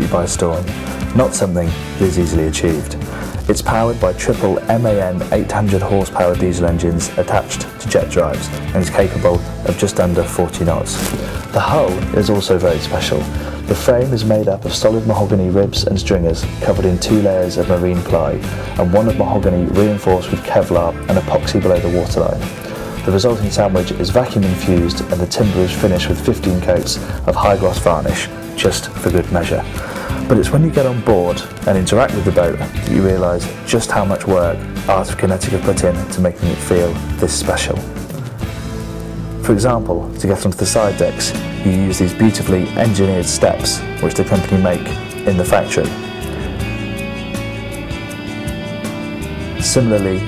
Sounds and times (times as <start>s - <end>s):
Speech: 0.0s - 37.9s, 39.4s - 46.0s, 49.6s - 50.2s
Music: 0.0s - 50.2s.